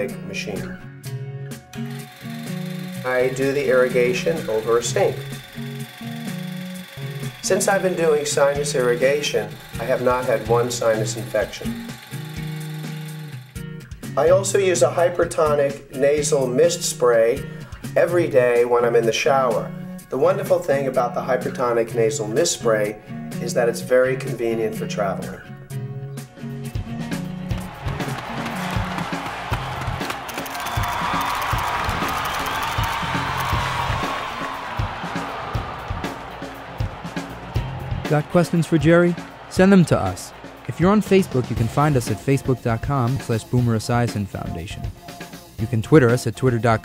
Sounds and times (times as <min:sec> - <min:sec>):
Speech: 0:00.0 - 0:00.8, 0:03.0 - 0:05.2, 0:07.4 - 0:11.8, 0:14.2 - 0:17.4, 0:18.0 - 0:25.5, 0:38.0 - 0:44.8, 0:45.6 - 0:46.8
Music: 0:00.0 - 0:46.8.